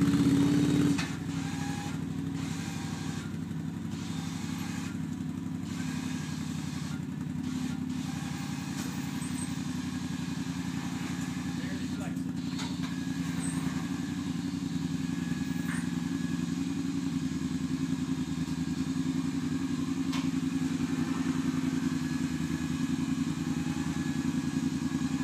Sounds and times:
Car: 0.0 - 25.2.

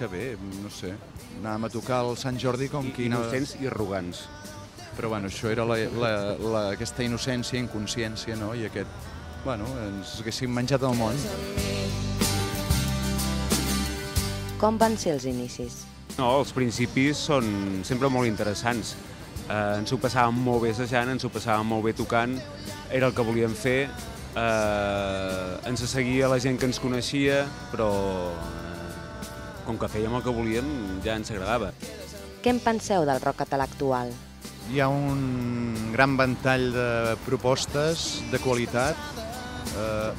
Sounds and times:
Speech: 0.0 - 4.3, 5.0 - 8.9, 9.5 - 11.4, 14.6 - 18.9, 19.5 - 28.9, 29.7 - 31.7, 32.5 - 39.0, 39.8 - 40.1
Music: 0.0 - 40.1.

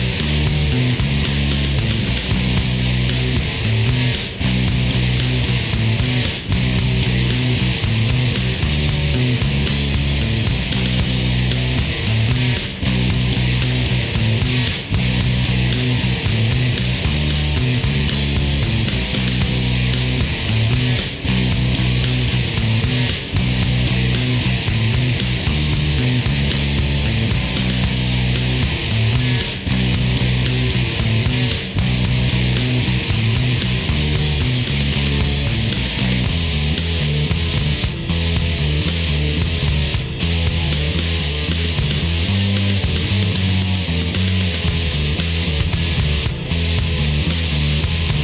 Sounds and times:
Grunge: 0.0 - 48.2.

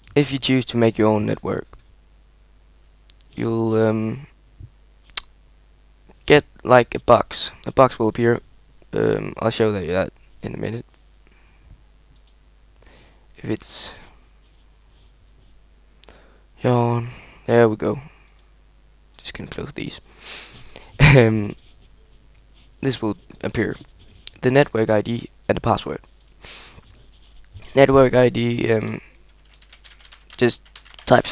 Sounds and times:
Inside, small room: 0.0 - 31.3
Speech: 0.2 - 1.8, 3.4 - 4.4, 6.2 - 10.9, 13.4 - 14.1, 16.6 - 18.1, 19.2 - 20.0, 21.0 - 21.6, 22.8 - 26.0, 27.7 - 29.1, 30.4 - 31.3.

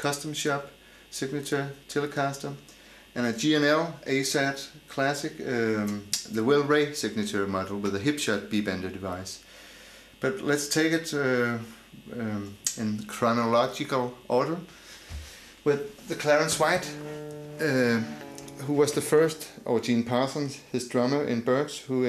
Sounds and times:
Speech: 0.0 - 9.5, 10.2 - 14.7, 15.6 - 17.0, 17.6 - 22.0.

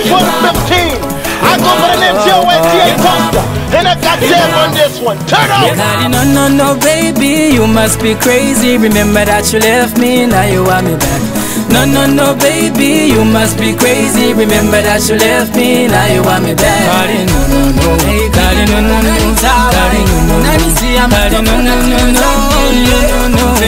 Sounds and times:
Happy music: 0.0 - 23.6.

